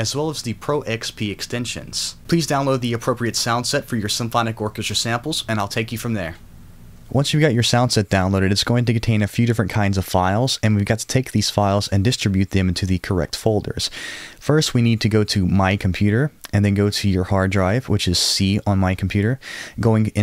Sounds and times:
Speech: 0.0s - 6.4s, 7.1s - 20.2s.

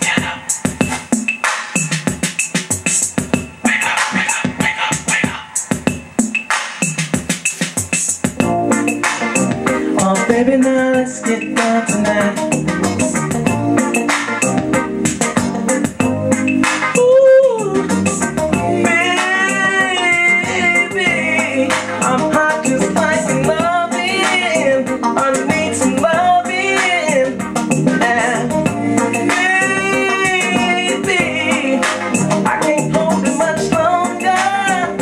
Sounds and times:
Drum machine: 0.0s - 35.0s
Singing: 10.0s - 12.6s, 17.0s - 18.0s, 18.7s - 28.6s, 29.2s - 35.0s.

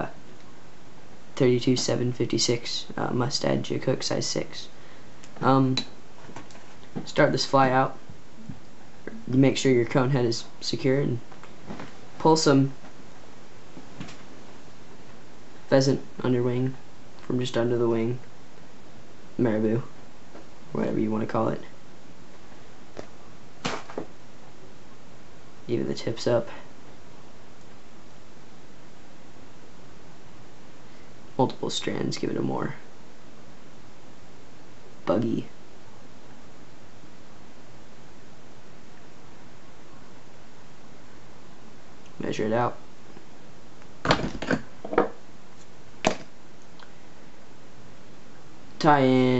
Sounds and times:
Speech: 0.0s - 0.2s, 1.4s - 4.8s, 5.4s - 6.0s, 7.0s - 8.0s, 9.1s - 11.3s, 12.2s - 12.8s, 15.7s - 18.3s, 19.4s - 20.0s, 20.7s - 21.8s, 25.7s - 26.7s, 31.4s - 32.9s, 35.0s - 35.6s, 42.2s - 42.8s, 48.8s - 49.3s.

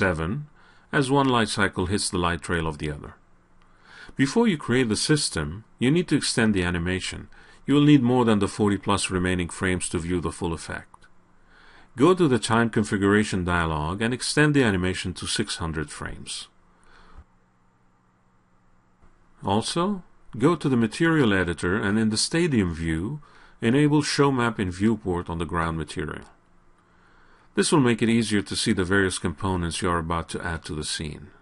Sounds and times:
Speech: 0.0s - 3.2s, 4.1s - 11.1s, 12.0s - 16.6s, 19.4s - 26.4s, 27.6s - 31.4s.

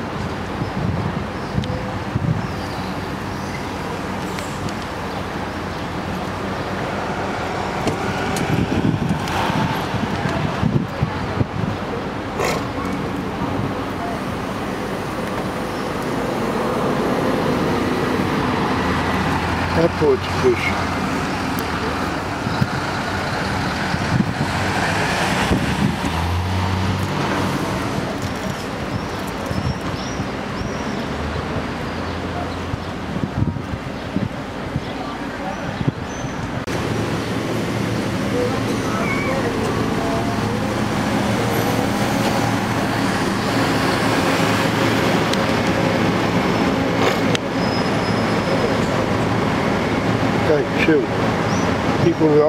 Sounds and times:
Bus: 0.0s - 52.4s.

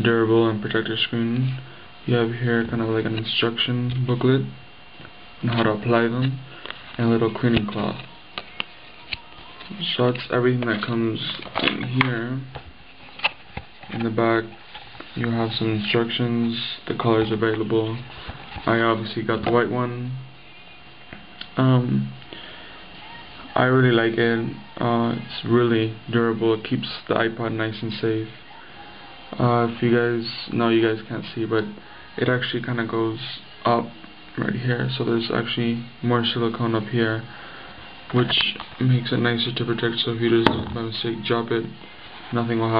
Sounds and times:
Speech: 0.0s - 4.6s, 5.4s - 8.3s, 9.0s - 12.6s, 13.9s - 14.6s, 15.2s - 20.3s, 21.4s - 22.2s, 23.0s - 37.3s, 38.1s - 42.7s
Inside, small room: 0.0s - 42.7s.

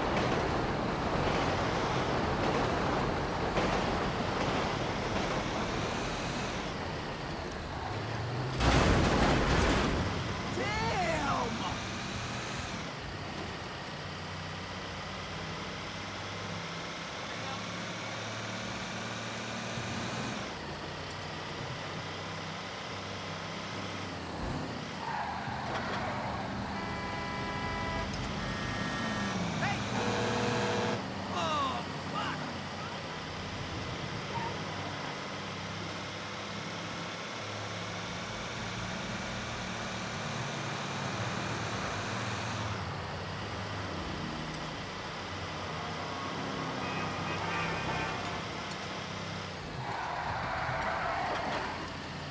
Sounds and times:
Car: 0.0s - 52.3s
Speech: 10.6s - 11.8s, 31.3s - 33.0s.

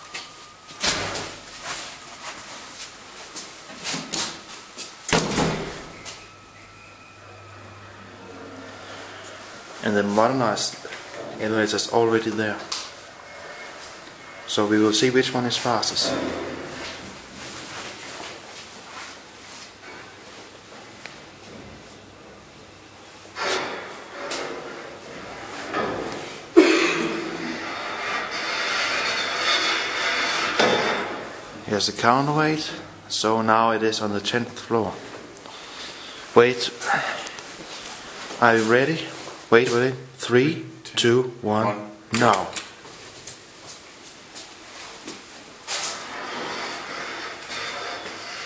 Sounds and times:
Speech: 9.8s - 12.7s, 14.5s - 16.4s, 31.6s - 35.0s, 36.4s - 37.2s, 38.4s - 42.6s.

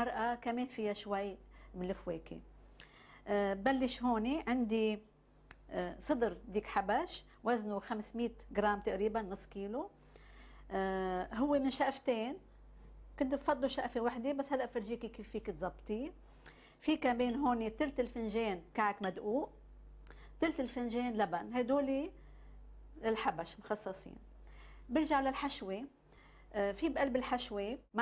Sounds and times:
Speech: 0.0s - 2.4s, 3.3s - 5.0s, 5.6s - 9.9s, 10.7s - 12.4s, 13.2s - 16.2s, 16.8s - 19.6s, 20.4s - 22.2s, 23.0s - 24.2s, 24.9s - 25.9s, 26.6s - 28.0s.

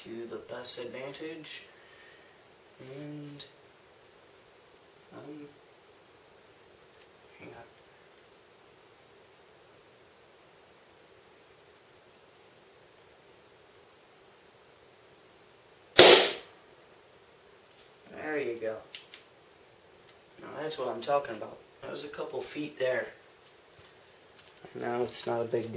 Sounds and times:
Speech: 0.0s - 1.7s, 2.8s - 3.6s, 5.1s - 5.6s, 7.4s - 7.7s, 18.1s - 18.9s, 20.4s - 23.2s, 24.6s - 25.7s.

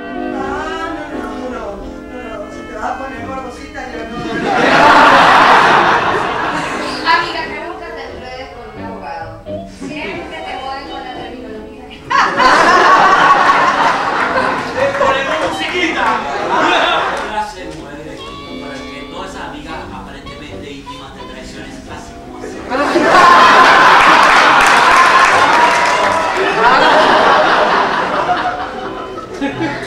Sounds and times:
Music: 0.0s - 29.8s
Speech: 0.4s - 4.6s, 14.7s - 22.8s.

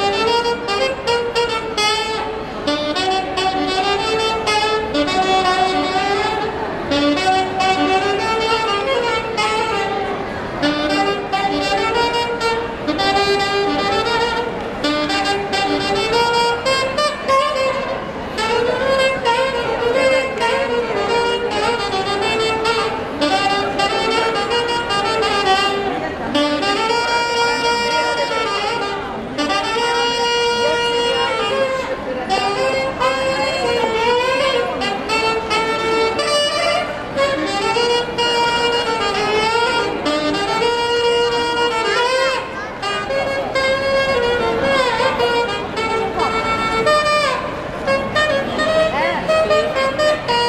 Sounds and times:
Music: 0.0s - 50.4s.

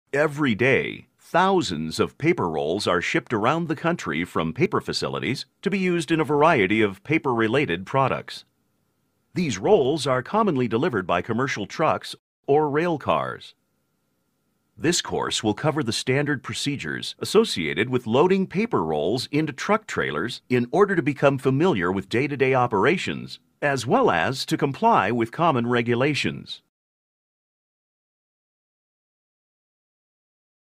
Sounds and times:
Speech: 0.2s - 8.5s, 9.4s - 13.6s, 14.8s - 26.7s.

